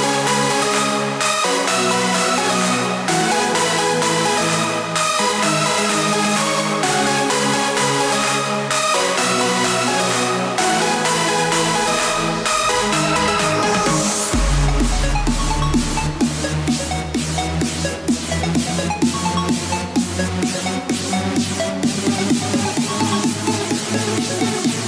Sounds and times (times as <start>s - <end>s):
Dance music: 0.0s - 24.8s.